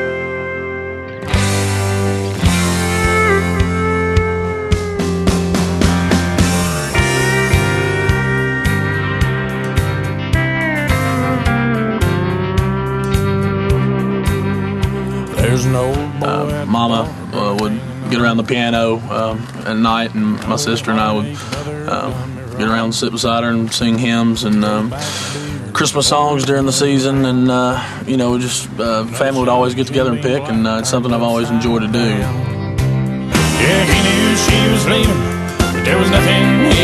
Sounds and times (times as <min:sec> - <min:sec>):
Bluegrass: 0:00.0 - 0:36.8
Speech: 0:15.3 - 0:32.5.